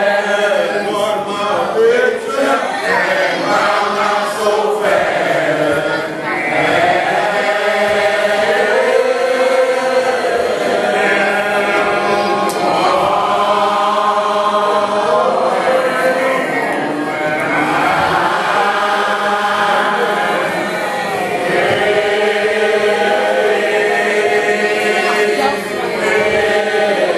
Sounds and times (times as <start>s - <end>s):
Choir: 0.0s - 27.1s
Speech: 18.0s - 22.0s, 24.8s - 27.1s.